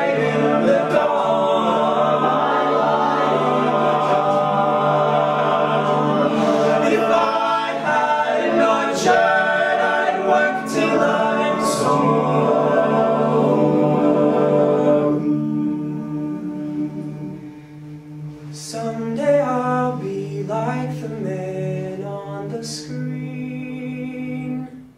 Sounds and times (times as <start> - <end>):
Music: 0.0 - 24.9.